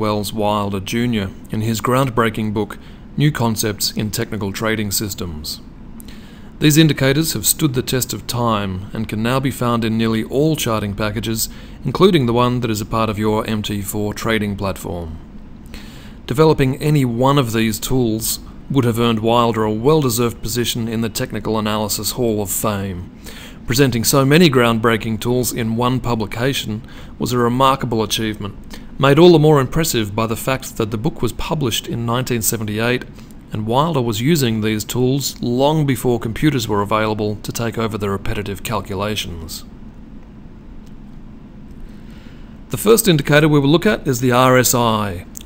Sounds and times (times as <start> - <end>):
Speech: 0.0 - 5.7, 6.6 - 15.2, 16.3 - 23.1, 23.7 - 39.7, 42.7 - 45.4.